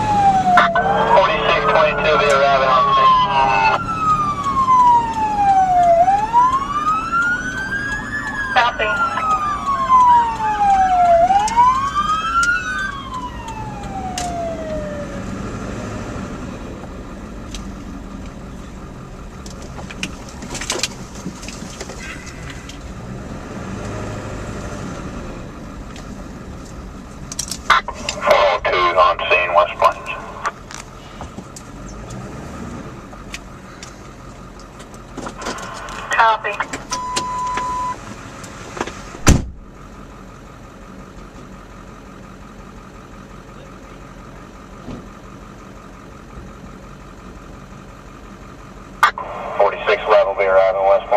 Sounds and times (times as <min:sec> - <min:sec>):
Car: 0:00.0 - 0:51.1
Speech: 0:00.6 - 0:03.8, 0:08.6 - 0:09.3, 0:28.0 - 0:30.5, 0:36.1 - 0:36.8, 0:49.0 - 0:51.1.